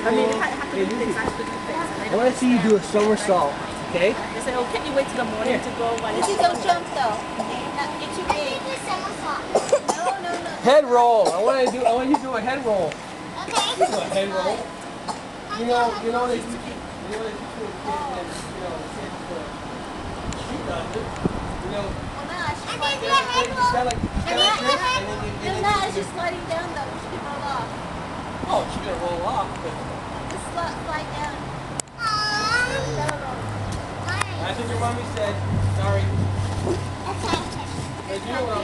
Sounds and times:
Outside, urban or manmade: 0:00.0 - 0:38.6
Child speech, kid speaking: 0:03.0 - 0:10.8, 0:13.3 - 0:14.7, 0:15.5 - 0:18.4, 0:21.7 - 0:27.8, 0:30.3 - 0:35.0, 0:37.1 - 0:38.6.

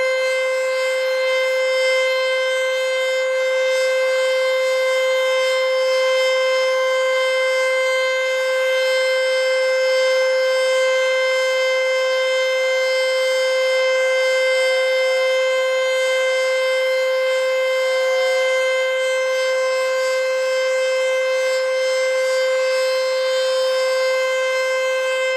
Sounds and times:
Siren: 0:00.0 - 0:25.3.

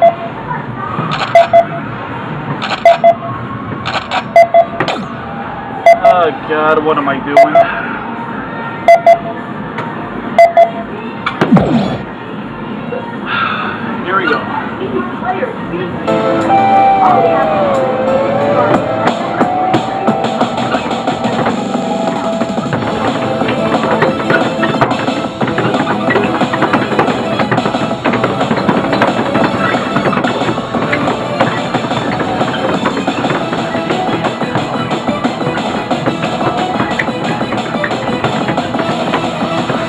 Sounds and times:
Music: 0:16.1 - 0:39.8.

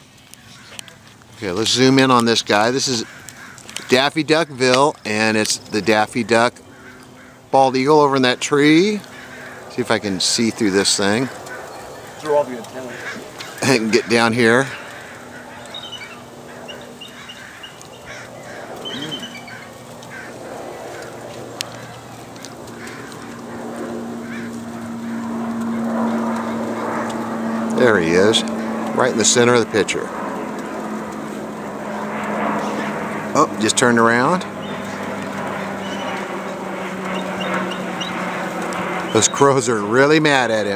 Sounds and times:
Speech: 0:01.4 - 0:03.1, 0:03.9 - 0:06.6, 0:07.6 - 0:09.1, 0:09.7 - 0:11.4, 0:12.2 - 0:14.8, 0:18.9 - 0:19.3, 0:27.8 - 0:30.2, 0:33.4 - 0:34.5, 0:39.1 - 0:40.7.

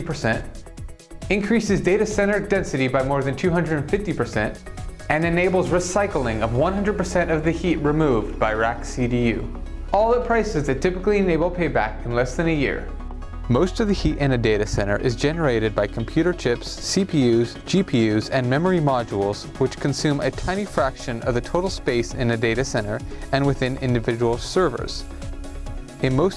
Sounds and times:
Speech: 0:00.0 - 0:00.6, 0:01.3 - 0:25.1, 0:26.0 - 0:26.3
Music: 0:00.0 - 0:26.3.

